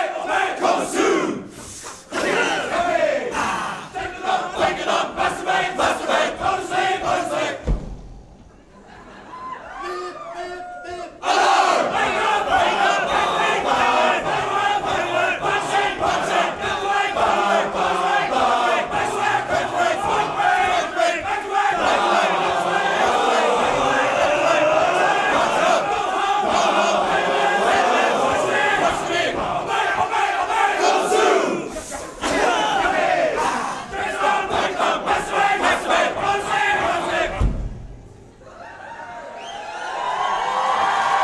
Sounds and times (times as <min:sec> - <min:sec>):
Crowd: 0:00.0 - 0:41.2.